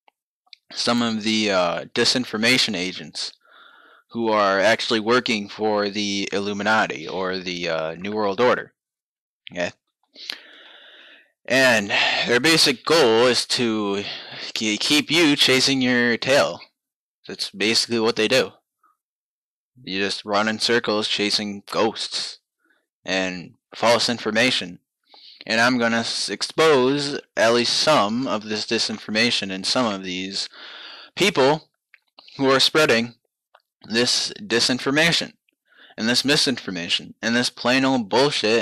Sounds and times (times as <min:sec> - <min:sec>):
Speech: 0:00.6 - 0:03.4, 0:04.1 - 0:08.7, 0:09.5 - 0:10.5, 0:11.5 - 0:16.7, 0:17.3 - 0:18.6, 0:19.8 - 0:22.4, 0:23.1 - 0:31.6, 0:32.2 - 0:33.2, 0:33.9 - 0:35.3, 0:35.9 - 0:38.6.